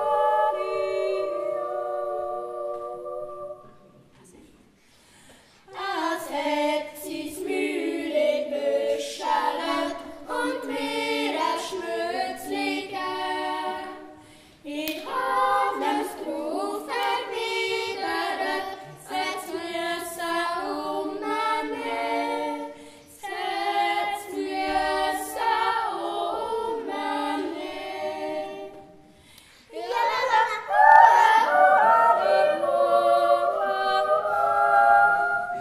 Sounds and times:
Choir: 0.0 - 35.6.

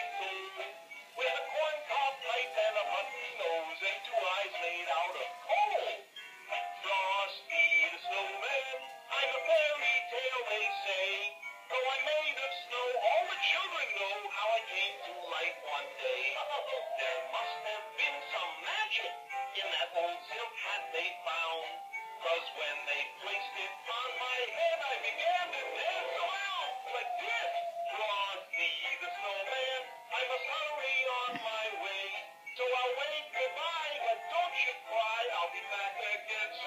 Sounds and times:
Male singing: 0.0 - 36.6
Music: 0.0 - 36.6.

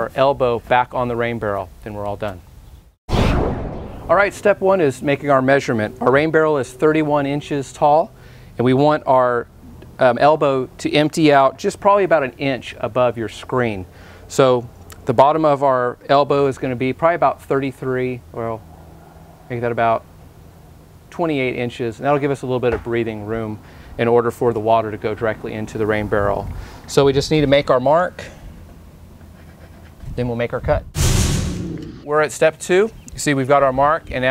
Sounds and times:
Speech: 0.0 - 2.4, 4.1 - 18.6, 19.5 - 20.0, 21.1 - 28.4, 30.1 - 30.9, 32.1 - 34.3.

